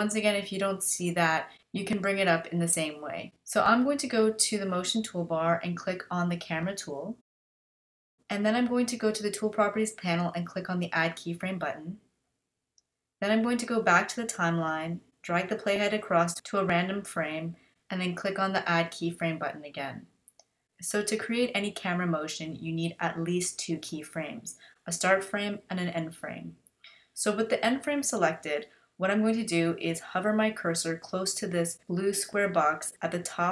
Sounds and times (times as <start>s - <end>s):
Speech: 0.0s - 7.2s, 8.3s - 12.0s, 13.2s - 20.1s, 20.8s - 26.6s, 27.2s - 33.5s.